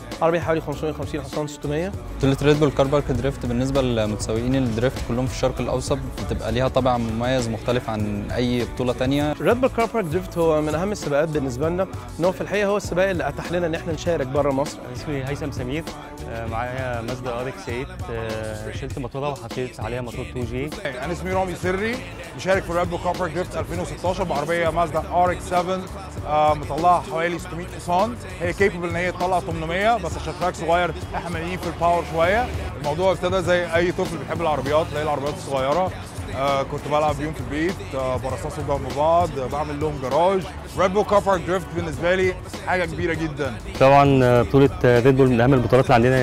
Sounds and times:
Music: 0.0s - 46.2s
Speech: 0.2s - 46.2s.

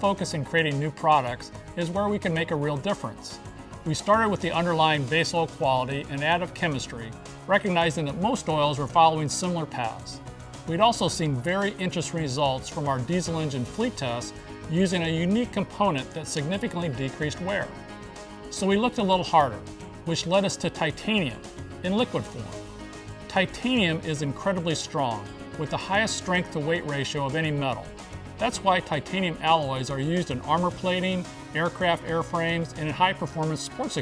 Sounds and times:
Speech: 0.0s - 17.8s, 18.5s - 22.6s, 23.3s - 34.0s
Music: 0.0s - 34.0s.

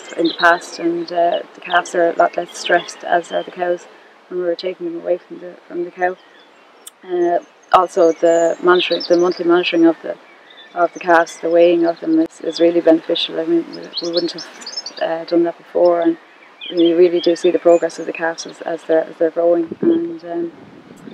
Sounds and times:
Speech: 0.0s - 6.2s, 6.9s - 10.2s, 10.8s - 20.5s
Outside, rural or natural: 0.0s - 21.1s
Chirp, tweet: 6.2s - 12.8s, 13.7s - 15.2s, 15.8s - 18.7s.

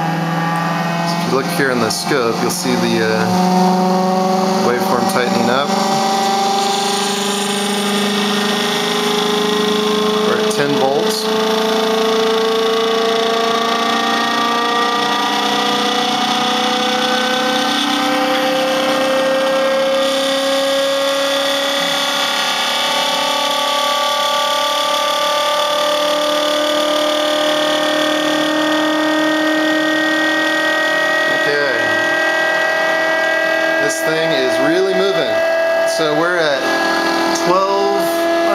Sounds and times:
Speech: 1.1s - 3.3s, 4.6s - 5.8s, 10.3s - 11.3s, 31.3s - 31.9s, 33.8s - 36.6s, 37.4s - 38.5s.

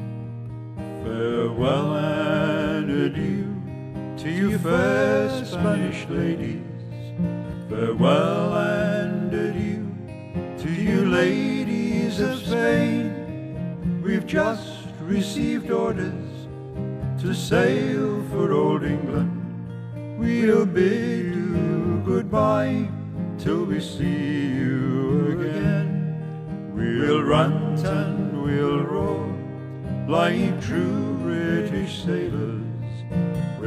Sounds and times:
Music: 0.0s - 33.6s.

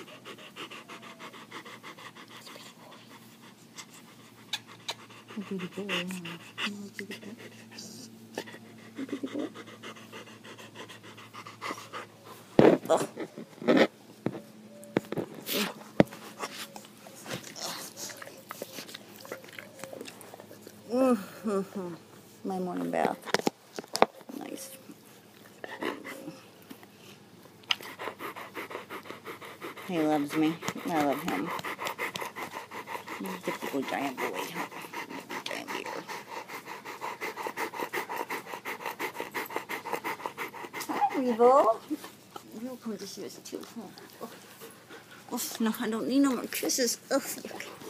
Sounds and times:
Dog: 0.0s - 13.9s, 14.9s - 20.8s, 27.7s - 42.6s
Canidae, dogs, wolves: 0.0s - 21.0s, 23.0s - 47.8s.

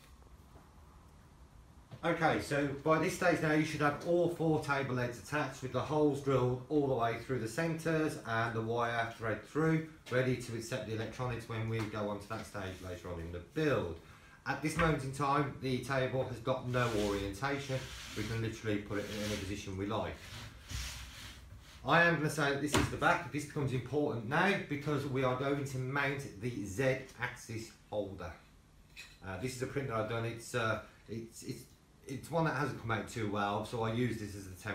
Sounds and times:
Speech: 2.0s - 20.2s, 21.8s - 28.5s, 29.2s - 34.7s.

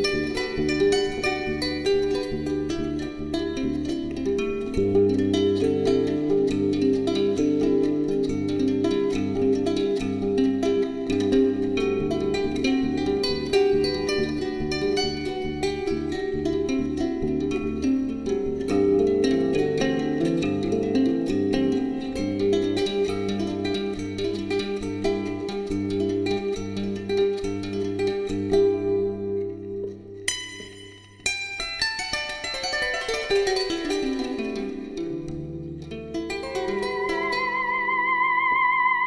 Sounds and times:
Zither: 0.0s - 39.0s.

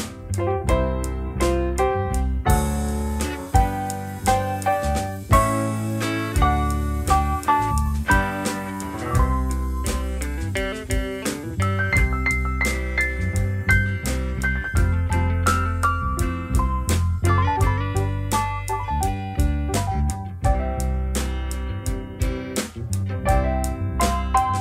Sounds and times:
Music: 0.0s - 24.6s.

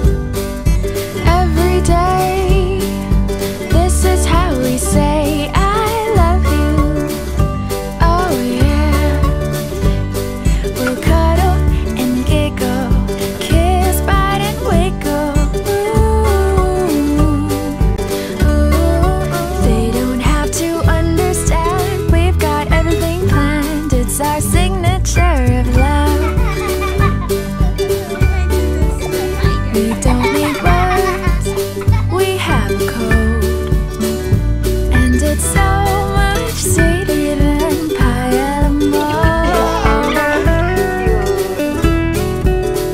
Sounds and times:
Music: 0.0s - 42.9s.

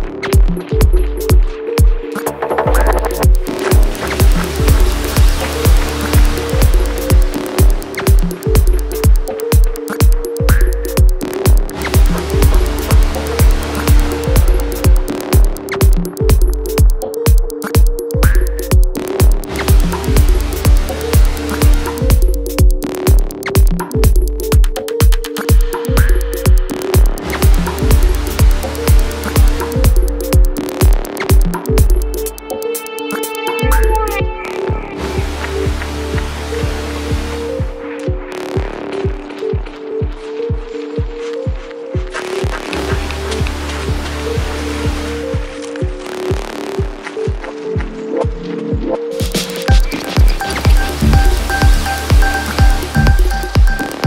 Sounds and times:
Music: 0.0s - 54.0s.

